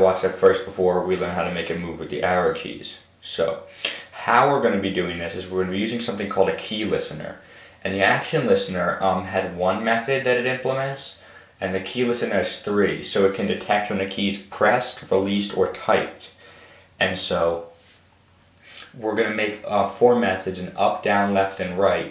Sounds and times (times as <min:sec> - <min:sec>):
Speech: 0:00.0 - 0:16.4, 0:17.0 - 0:17.8, 0:18.7 - 0:22.1.